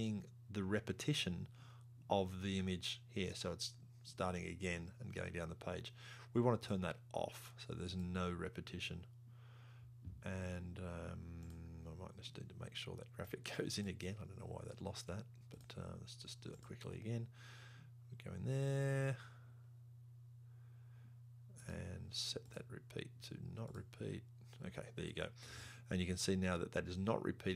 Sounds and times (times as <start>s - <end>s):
Speech: 0.0s - 1.5s, 2.1s - 9.1s, 10.2s - 17.4s, 18.1s - 19.3s, 21.6s - 27.5s.